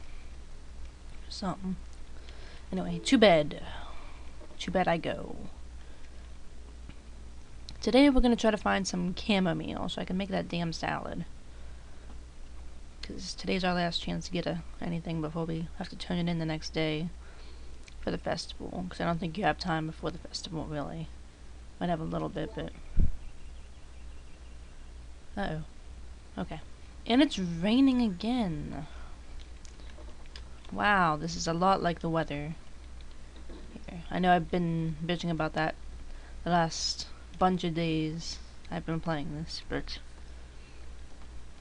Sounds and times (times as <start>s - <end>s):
Speech: 1.3s - 1.8s, 2.7s - 4.0s, 4.6s - 5.6s, 7.7s - 11.3s, 13.0s - 17.2s, 18.0s - 21.1s, 21.8s - 22.8s, 25.4s - 25.7s, 26.4s - 29.0s, 30.7s - 32.6s, 33.7s - 35.8s, 36.4s - 40.0s.